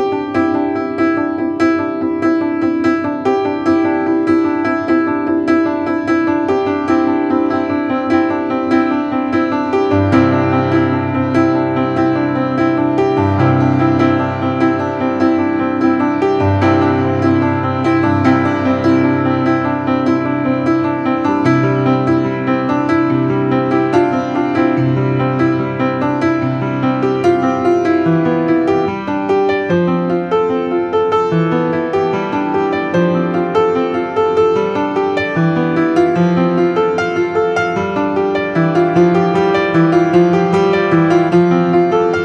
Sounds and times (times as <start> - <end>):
Music: 0.0 - 42.2.